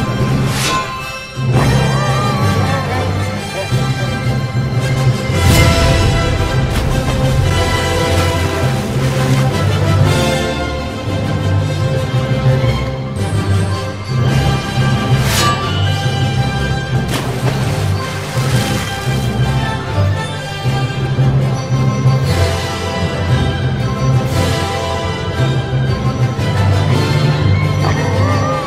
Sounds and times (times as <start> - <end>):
Music: 0.0 - 28.6.